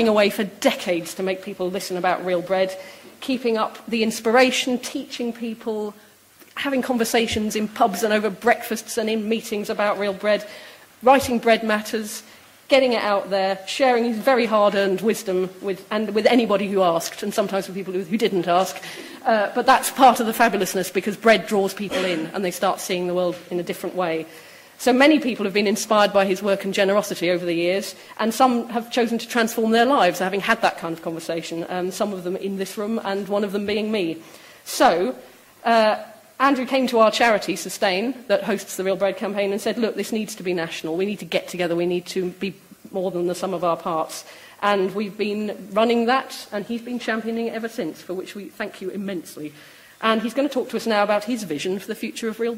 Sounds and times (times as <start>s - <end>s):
Female speech, woman speaking: 0.0s - 6.0s, 6.6s - 52.5s
Narration, monologue: 0.0s - 52.5s.